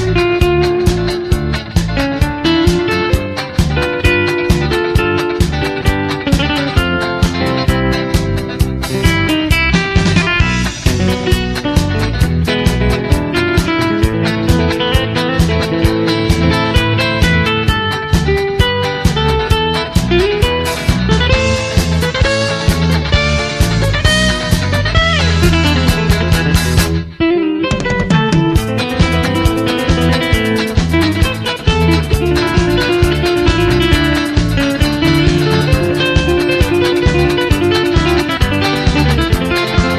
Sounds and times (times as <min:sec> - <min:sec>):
Acoustic guitar: 0:00.0 - 0:39.9
Bass guitar: 0:00.0 - 0:39.9
Electric guitar: 0:00.0 - 0:39.9
Strum: 0:00.0 - 0:39.9.